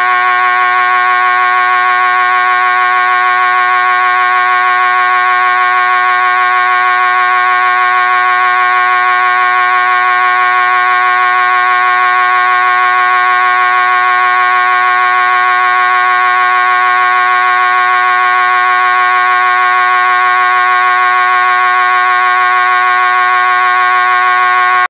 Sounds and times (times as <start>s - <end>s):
Siren: 0.0s - 24.8s.